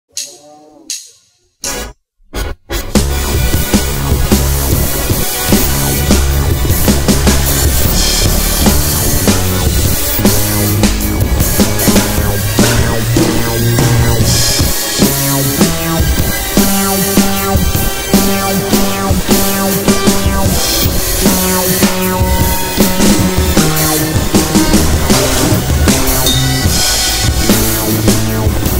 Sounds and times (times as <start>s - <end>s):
Soundtrack music: 0.2s - 28.7s.